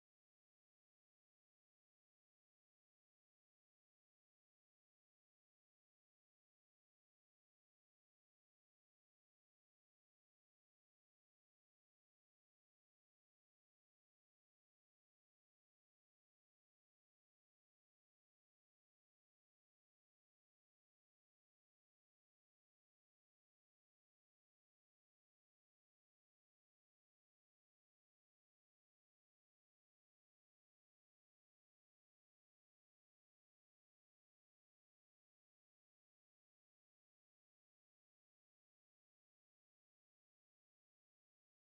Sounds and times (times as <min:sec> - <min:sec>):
Silence: 0:00.0 - 0:41.6.